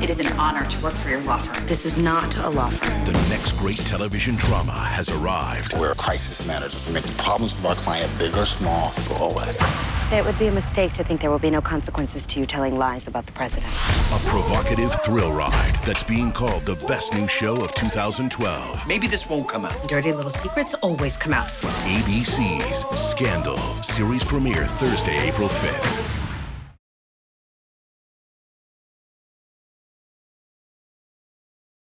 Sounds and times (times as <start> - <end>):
Music: 0.0 - 11.1, 11.7 - 26.6
Speech: 0.0 - 26.0.